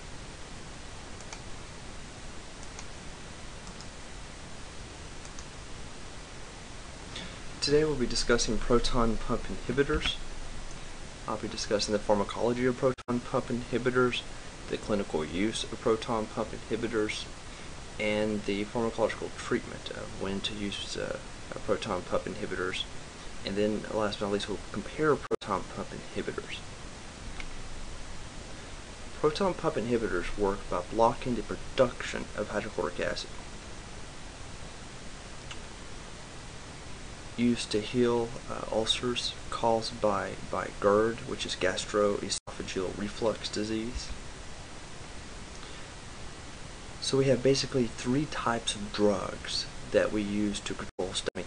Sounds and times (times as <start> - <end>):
Speech: 7.6 - 10.2, 11.3 - 17.4, 18.0 - 26.6, 29.2 - 33.4, 37.4 - 44.2, 47.0 - 51.4.